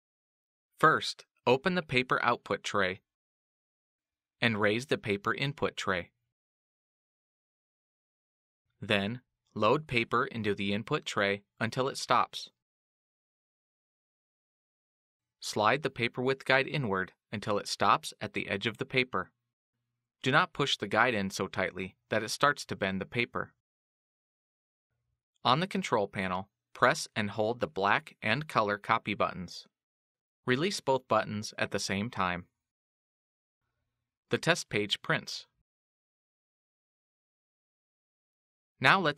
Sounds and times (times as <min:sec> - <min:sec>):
Speech: 0:00.8 - 0:03.1, 0:04.4 - 0:06.2, 0:08.8 - 0:12.6, 0:15.4 - 0:19.3, 0:20.2 - 0:23.6, 0:25.5 - 0:29.7, 0:30.5 - 0:32.5, 0:34.3 - 0:35.6, 0:38.8 - 0:39.1.